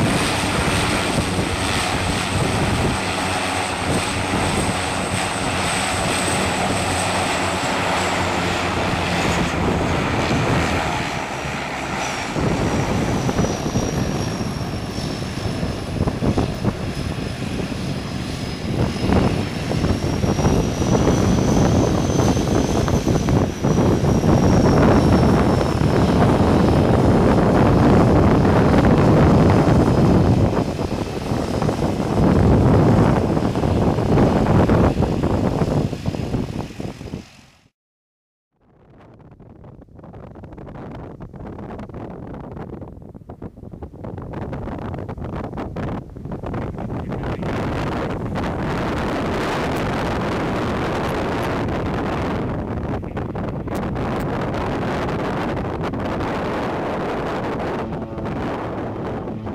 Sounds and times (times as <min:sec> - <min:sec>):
Fixed-wing aircraft, airplane: 0:00.0 - 0:37.8, 0:38.6 - 0:59.5
Propeller, airscrew: 0:00.0 - 0:37.8, 0:38.5 - 0:59.5.